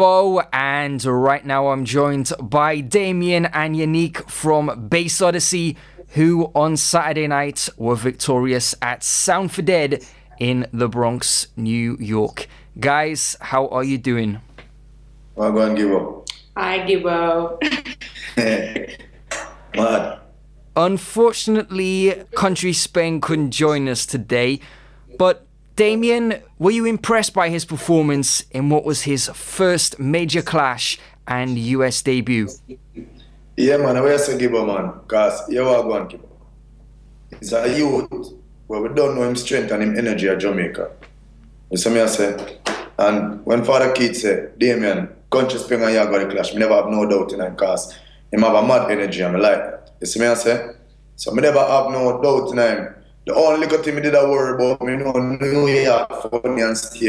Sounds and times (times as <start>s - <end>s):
Speech: 0.0s - 14.4s, 19.8s - 24.6s, 25.2s - 32.8s, 37.4s - 41.0s, 41.8s - 57.0s.